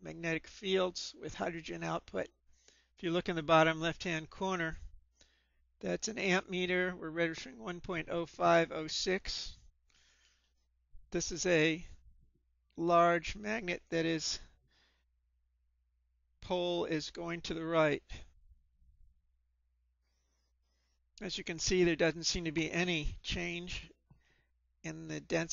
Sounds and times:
Speech: 0:00.0 - 0:02.3, 0:03.0 - 0:04.9, 0:05.8 - 0:09.6, 0:11.2 - 0:12.0, 0:12.8 - 0:14.5, 0:16.4 - 0:18.3, 0:21.2 - 0:24.0, 0:24.9 - 0:25.5.

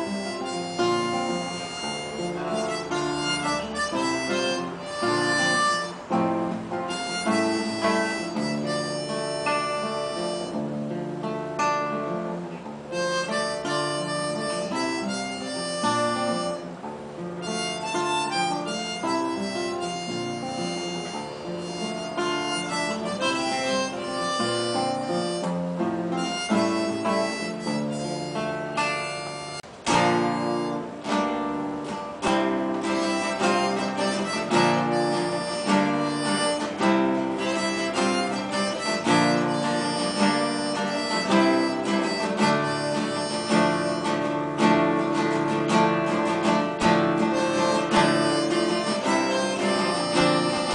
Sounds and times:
Guitar: 0:00.0 - 0:50.7.

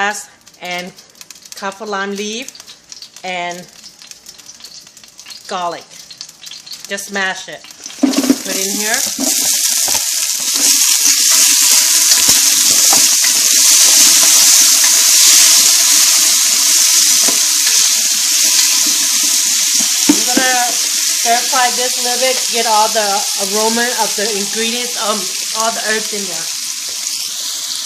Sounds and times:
Frying (food): 0:00.0 - 0:27.8
Speech: 0:08.4 - 0:09.0, 0:21.3 - 0:26.5.

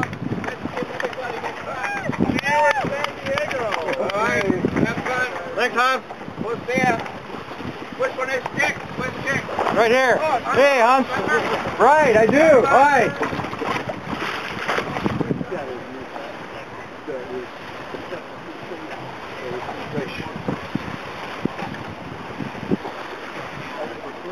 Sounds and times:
Wind noise (microphone): 0:00.0 - 0:16.0, 0:19.0 - 0:24.3
Sailboat, sailing ship: 0:00.0 - 0:24.3.

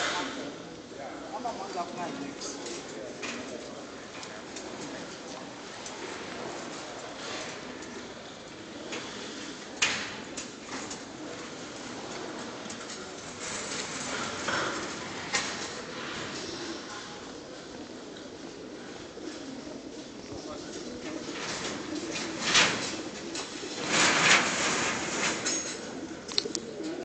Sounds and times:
Speech: 0:00.0 - 0:05.7, 0:20.2 - 0:21.3.

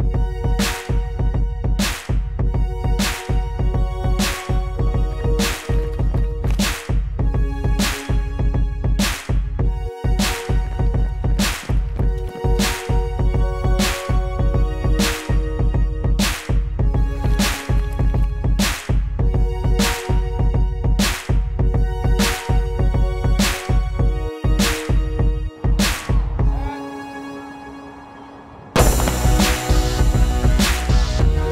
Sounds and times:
Music: 0:00.0 - 0:31.5
Outside, urban or manmade: 0:24.8 - 0:31.5.

